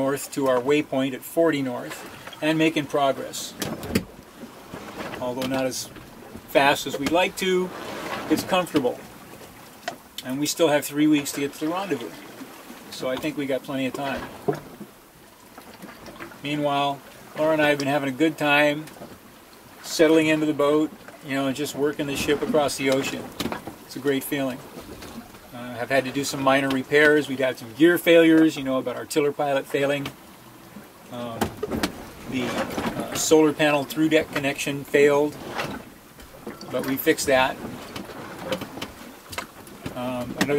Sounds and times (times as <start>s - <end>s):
Speech: 0.0s - 3.6s, 5.2s - 5.9s, 6.5s - 7.7s, 8.3s - 9.0s, 10.2s - 12.2s, 13.0s - 14.3s, 16.4s - 18.9s, 19.9s - 23.3s, 23.9s - 24.6s, 25.6s - 30.2s, 31.1s - 31.5s, 32.3s - 35.4s, 36.7s - 37.6s, 40.0s - 40.5s
Sailboat, sailing ship: 0.0s - 40.5s.